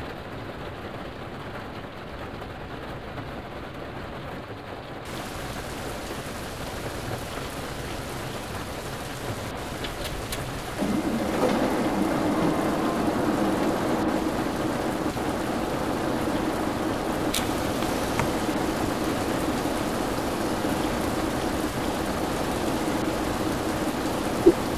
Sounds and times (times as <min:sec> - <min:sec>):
Bus: 0:00.0 - 0:24.7.